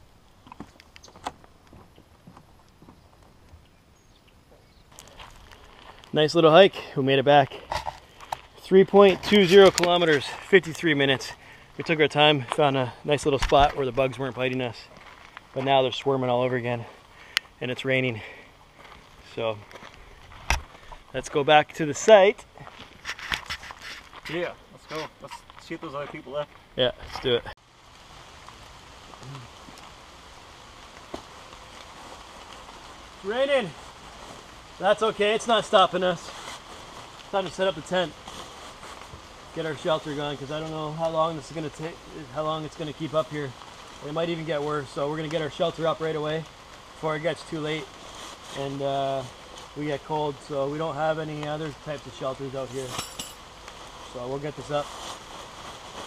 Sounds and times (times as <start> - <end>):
Rain: 4.9 - 56.0.